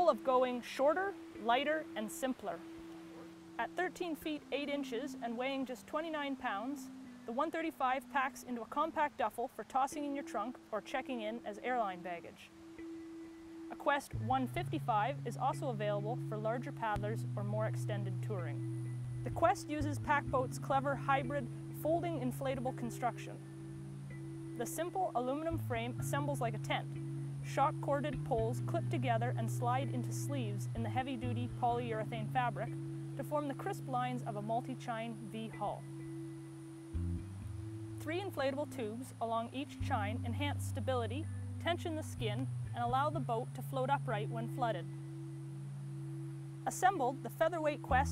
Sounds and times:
Speech: 0.0s - 2.6s, 3.6s - 12.5s, 13.7s - 18.6s, 19.3s - 23.4s, 24.6s - 26.8s, 27.5s - 35.8s, 38.0s - 44.8s, 46.7s - 48.1s
Music: 0.0s - 48.1s.

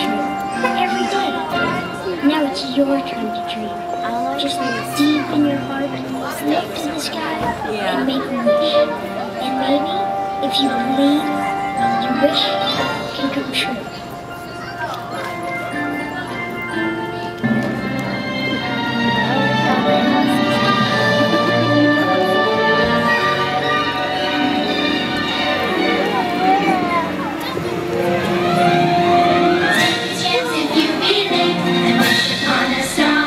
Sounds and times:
Speech: 0.0s - 17.4s
Christmas music: 0.0s - 33.2s.

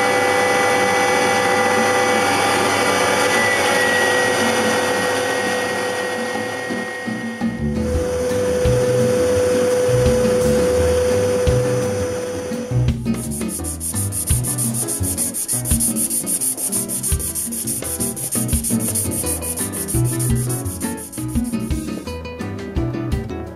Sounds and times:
Music: 4.4s - 23.5s.

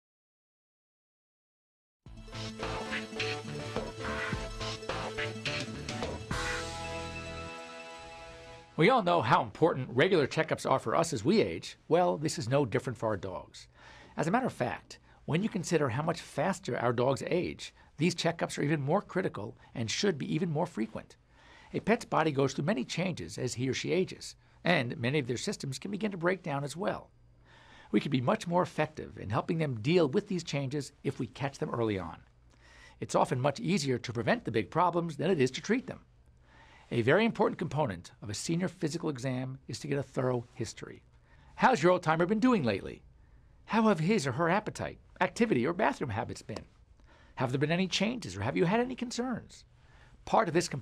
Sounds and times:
Speech: 8.8s - 21.2s, 21.8s - 27.1s, 27.9s - 32.3s, 33.0s - 36.1s, 36.9s - 41.0s, 41.6s - 43.0s, 43.7s - 46.7s, 47.4s - 49.7s, 50.3s - 50.8s.

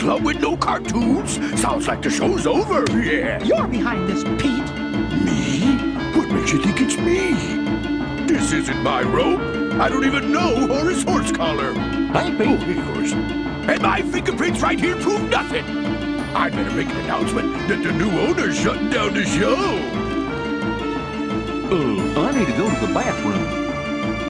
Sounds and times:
Speech: 0.0s - 7.6s, 8.3s - 15.6s, 16.3s - 20.0s, 21.7s - 23.6s
Music: 0.0s - 24.3s.

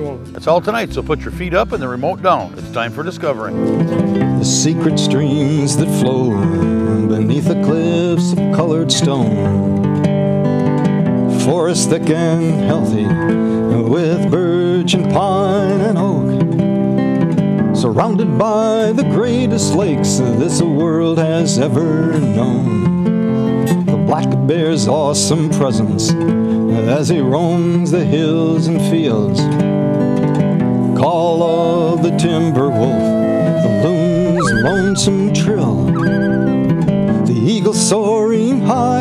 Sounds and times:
Music: 0.0s - 39.0s.

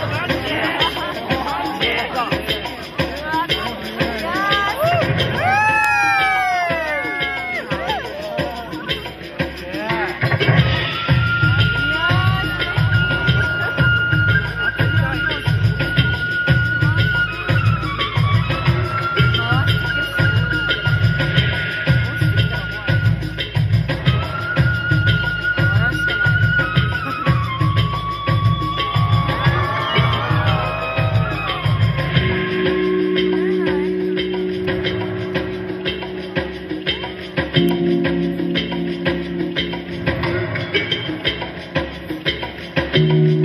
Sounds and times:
Speech: 0.0s - 5.1s, 11.4s - 18.2s, 19.0s - 23.5s, 25.5s - 27.4s
Music: 0.0s - 43.4s.

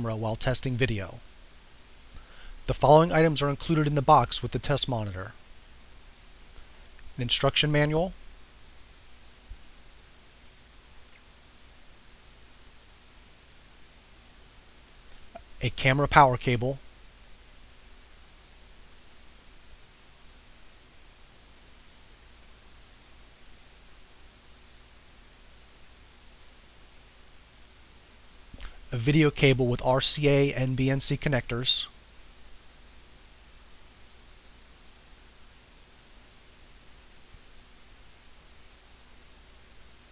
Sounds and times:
Speech: 0.0s - 1.2s, 2.7s - 5.4s, 7.2s - 8.2s, 15.6s - 16.8s, 28.9s - 32.0s.

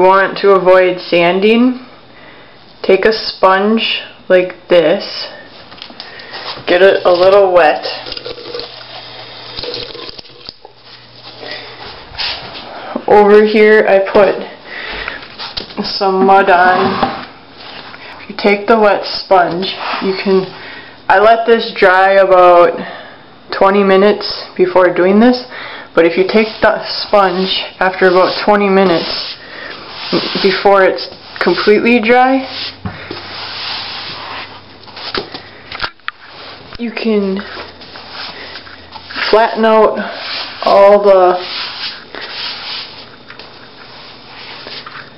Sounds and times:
Rub: 26.3s - 30.7s, 32.4s - 34.6s, 40.0s - 44.9s.

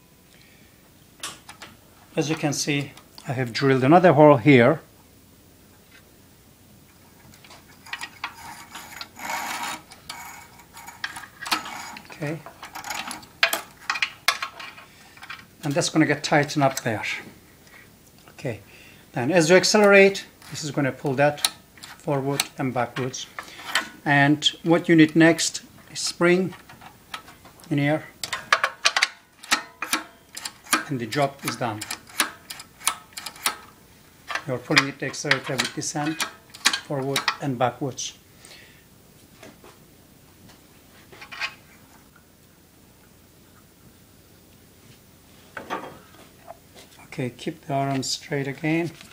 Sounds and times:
Speech: 2.2s - 4.9s, 12.1s - 12.5s, 15.6s - 17.3s, 18.3s - 18.6s, 19.2s - 21.5s, 22.1s - 23.3s, 24.0s - 26.6s, 27.7s - 28.1s, 30.8s - 31.9s, 34.4s - 36.2s, 36.8s - 38.2s, 47.0s - 49.0s.

